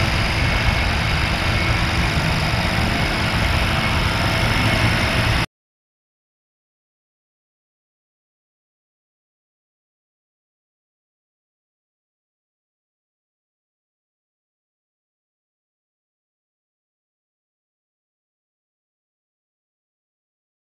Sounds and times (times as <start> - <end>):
Helicopter: 0.0 - 5.5.